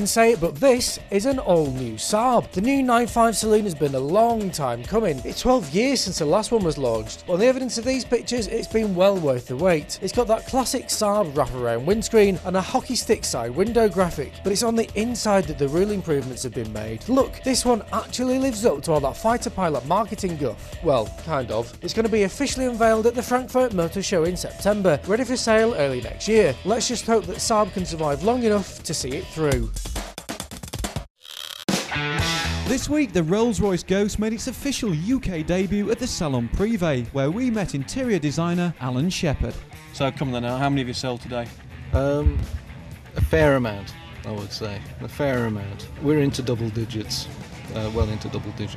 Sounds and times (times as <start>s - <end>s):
Speech: 0.0s - 29.7s, 32.7s - 42.5s, 43.2s - 48.7s
Music: 0.0s - 31.1s, 31.7s - 48.7s.